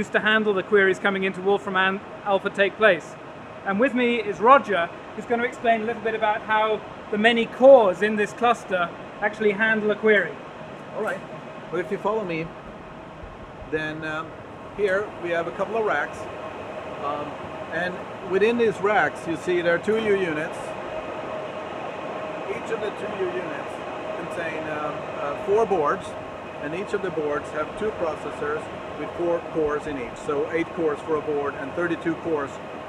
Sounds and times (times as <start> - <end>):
Speech: 0.0 - 10.4, 11.0 - 11.2, 11.8 - 12.5, 13.7 - 16.2, 17.0 - 20.7, 22.5 - 32.6.